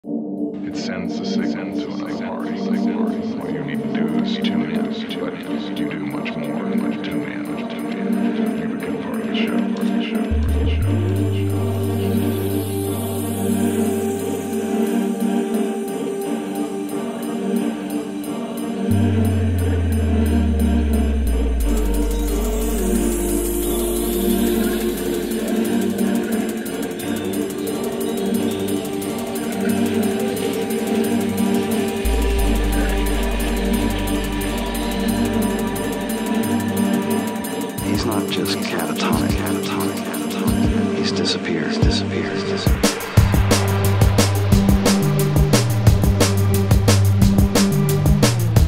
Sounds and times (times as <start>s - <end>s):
Electronic music: 0.0s - 48.6s
Speech: 0.6s - 12.2s, 37.8s - 42.8s.